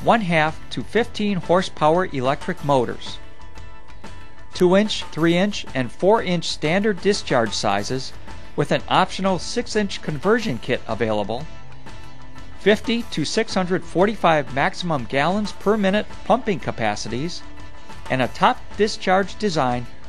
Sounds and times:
Speech: 0:00.0 - 0:03.2, 0:04.6 - 0:11.5, 0:12.6 - 0:17.4, 0:18.1 - 0:19.9
Music: 0:00.0 - 0:20.0.

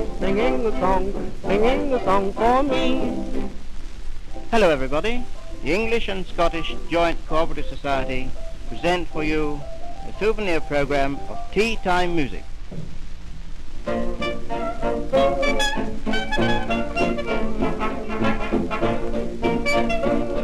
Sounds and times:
Music: 0:00.0 - 0:13.0, 0:13.8 - 0:20.4
Speech: 0:00.2 - 0:03.1, 0:04.5 - 0:12.4.

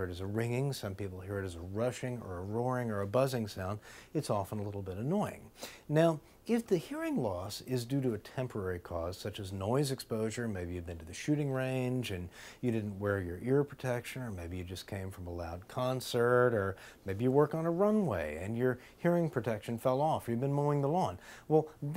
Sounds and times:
Speech: 0:00.0 - 0:21.9.

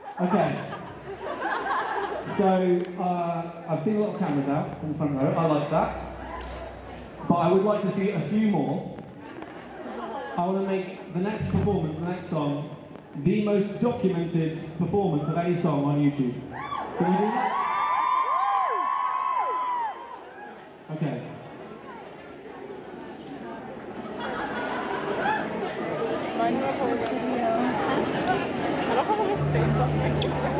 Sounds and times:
Speech: 0:00.1 - 0:00.8, 0:02.3 - 0:06.1, 0:07.2 - 0:09.0, 0:10.4 - 0:16.4, 0:20.9 - 0:21.4.

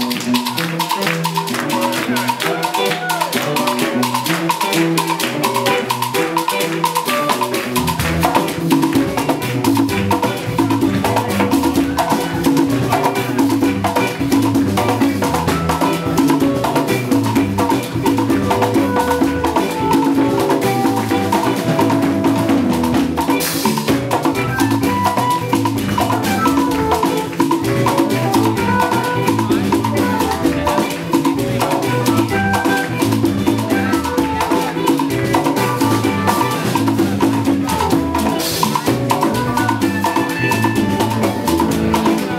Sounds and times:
Salsa music: 0:00.0 - 0:42.3.

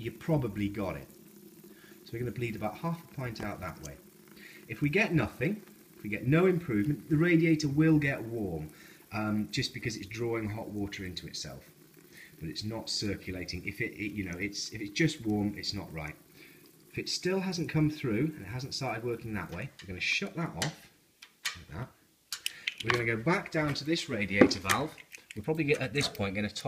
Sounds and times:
Speech: 0:00.0 - 0:01.1, 0:02.1 - 0:04.0, 0:04.7 - 0:11.7, 0:12.4 - 0:16.2, 0:17.0 - 0:20.9, 0:21.5 - 0:22.0, 0:22.8 - 0:26.6.

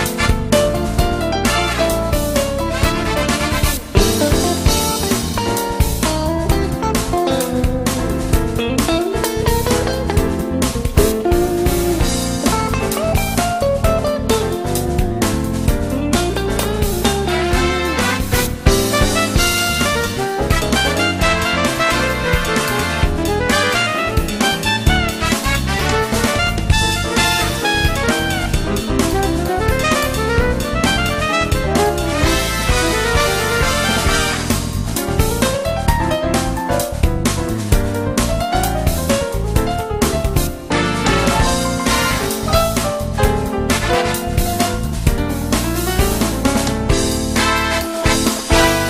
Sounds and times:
Music: 0:00.0 - 0:48.8.

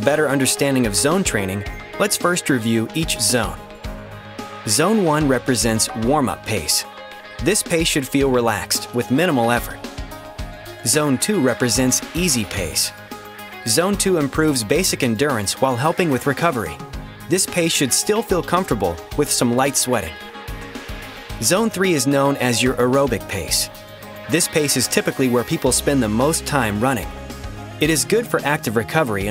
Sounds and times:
Speech: 0:00.0 - 0:03.6, 0:04.7 - 0:09.8, 0:10.8 - 0:13.0, 0:13.7 - 0:20.2, 0:21.4 - 0:23.7, 0:24.3 - 0:27.1, 0:27.8 - 0:29.3
Music: 0:00.0 - 0:29.3.

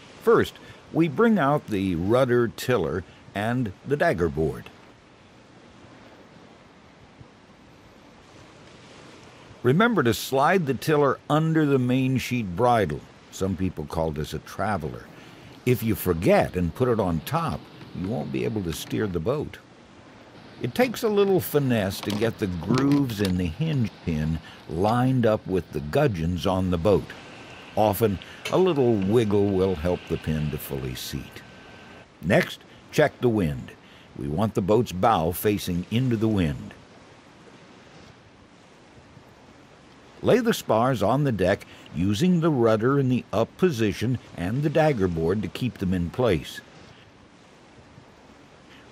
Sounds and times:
Speech: 0:00.2 - 0:04.7, 0:09.6 - 0:19.6, 0:20.6 - 0:27.2, 0:27.8 - 0:31.4, 0:32.2 - 0:36.8, 0:40.2 - 0:46.7.

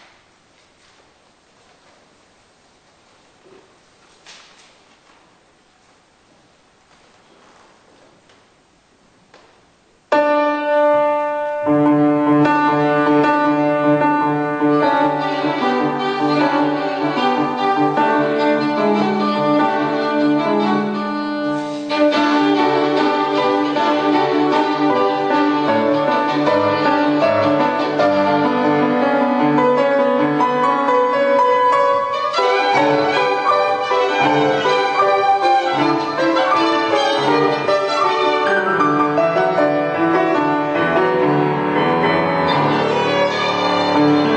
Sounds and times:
Piano: 0:00.0 - 0:44.3
String section: 0:11.7 - 0:44.3
Violin, fiddle: 0:13.5 - 0:29.0, 0:31.4 - 0:39.9, 0:42.1 - 0:44.3.

